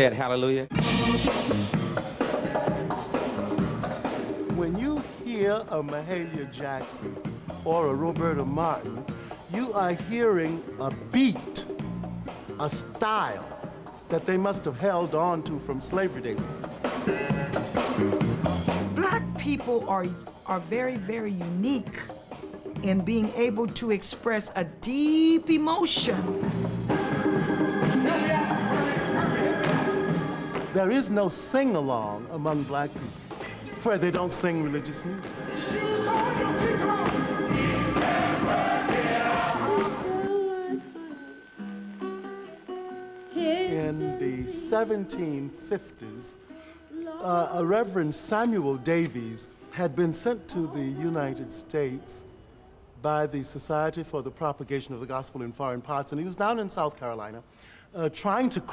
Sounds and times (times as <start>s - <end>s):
Gospel music: 0.0s - 58.7s.